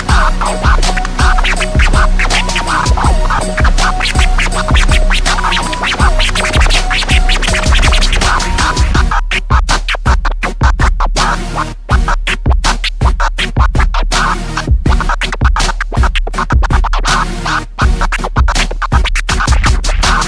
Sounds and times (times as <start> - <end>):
Inside, small room: 0.0 - 20.2
Scratching (performance technique): 0.0 - 20.2.